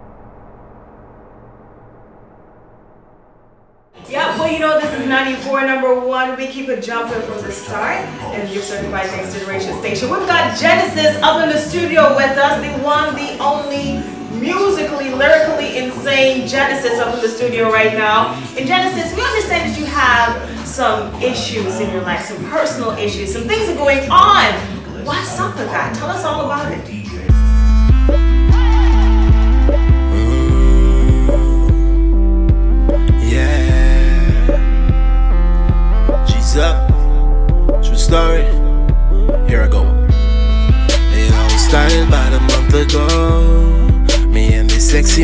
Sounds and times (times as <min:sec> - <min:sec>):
Speech: 0:04.0 - 0:27.5, 0:39.5 - 0:40.0
Music: 0:04.0 - 0:45.2.